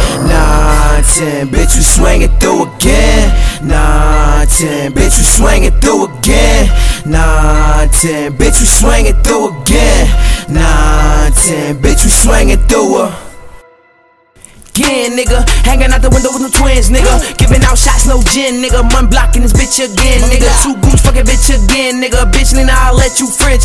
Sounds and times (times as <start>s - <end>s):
Music: 0.0s - 23.6s.